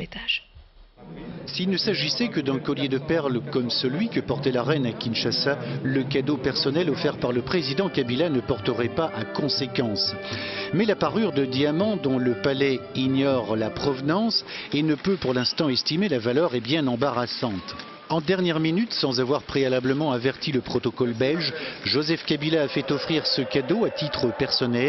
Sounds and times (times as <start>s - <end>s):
Speech: 0.0s - 10.2s, 10.8s - 24.8s.